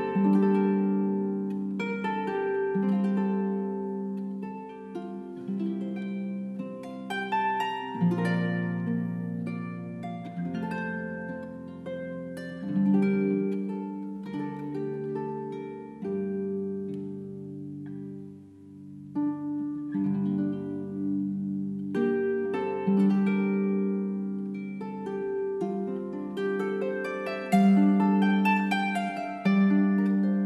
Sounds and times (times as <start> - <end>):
Harp: 0.0 - 30.4
Pizzicato: 0.0 - 30.4.